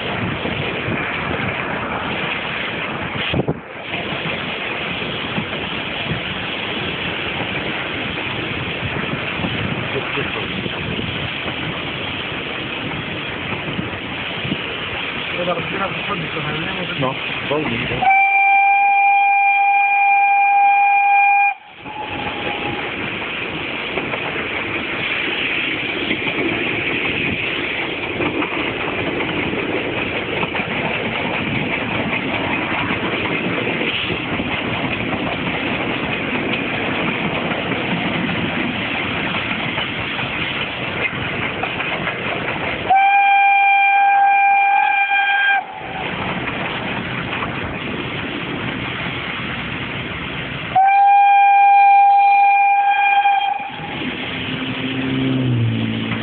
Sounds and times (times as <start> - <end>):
Train: 0.0 - 56.2.